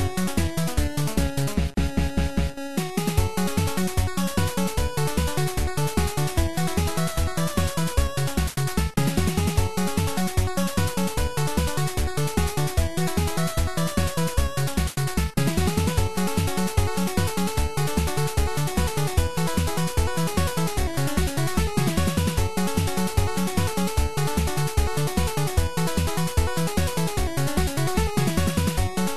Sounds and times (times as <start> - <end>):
Video game music: 0.0 - 29.1.